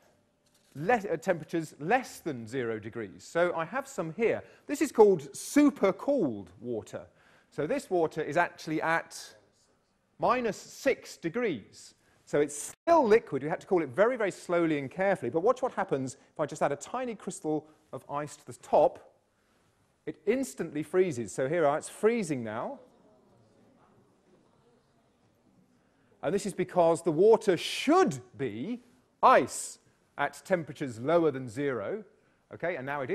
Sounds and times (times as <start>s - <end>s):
Speech: 0.8s - 19.2s, 20.1s - 25.5s, 26.2s - 33.1s.